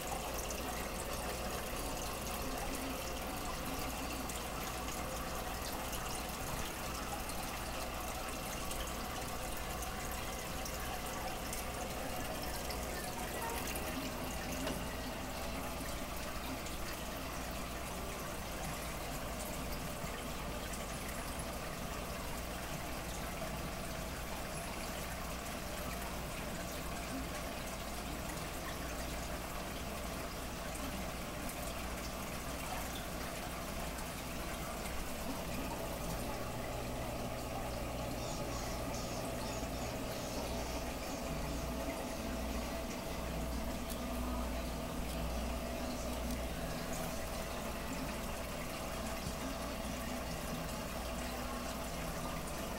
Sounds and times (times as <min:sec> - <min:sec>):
Water: 0:00.0 - 0:52.7
Water tap, faucet: 0:00.0 - 0:52.7.